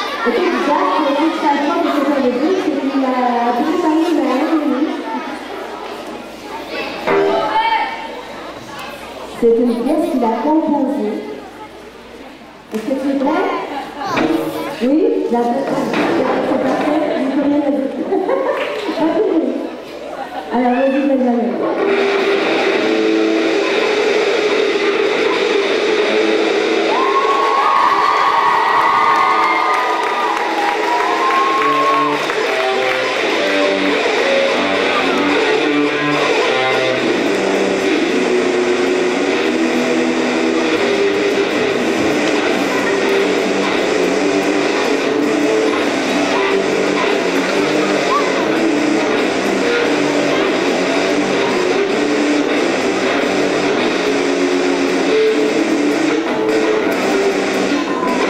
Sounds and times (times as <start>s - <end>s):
Speech: 0.0s - 18.1s, 18.9s - 21.8s.